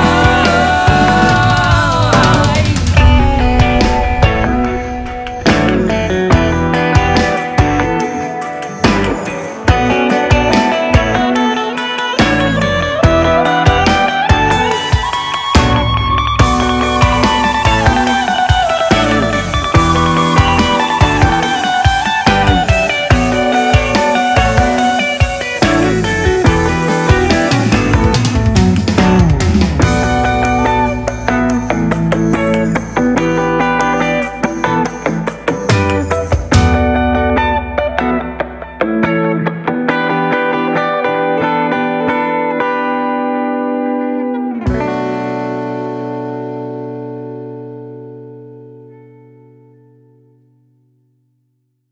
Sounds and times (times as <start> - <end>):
Music: 0.0 - 51.8
Effects unit: 0.0 - 51.9.